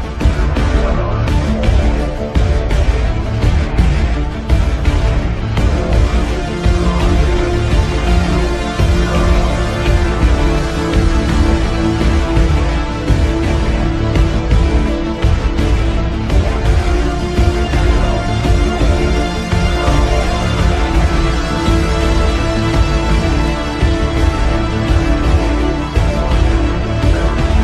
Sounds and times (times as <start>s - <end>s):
Music: 0.0s - 27.6s.